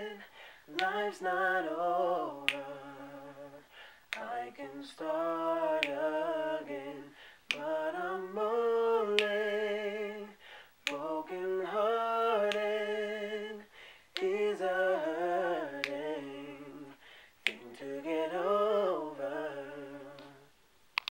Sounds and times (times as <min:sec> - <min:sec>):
Male singing: 0:00.0 - 0:20.5
Choir: 0:00.0 - 0:20.6.